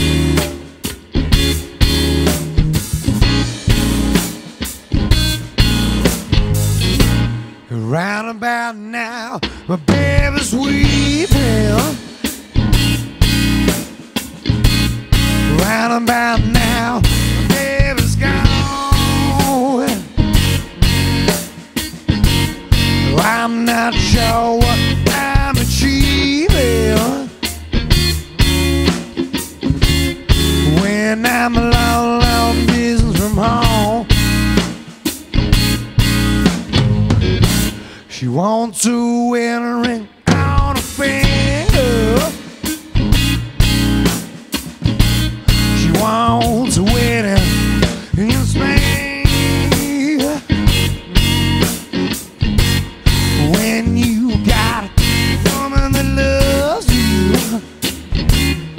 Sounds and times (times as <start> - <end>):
Music: 0.0 - 58.7.